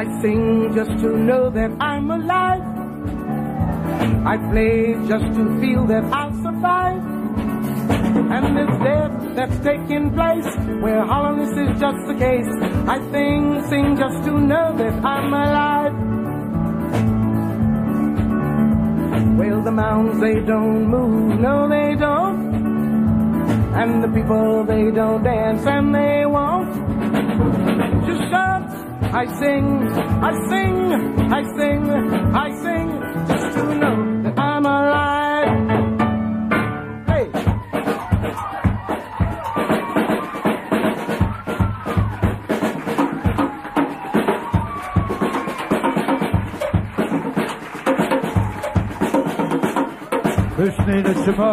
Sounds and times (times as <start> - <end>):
Music: 0.0 - 51.5.